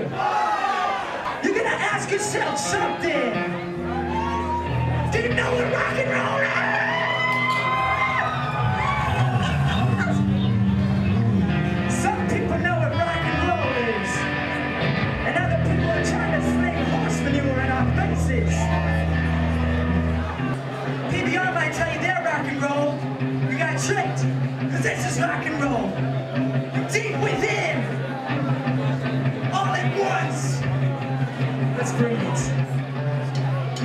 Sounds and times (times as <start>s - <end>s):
Music: 0.0s - 33.8s
Speech: 1.4s - 3.5s, 5.1s - 6.8s, 11.9s - 14.3s, 15.2s - 18.7s, 21.1s - 26.0s, 26.8s - 28.6s, 29.5s - 30.7s, 31.7s - 32.6s.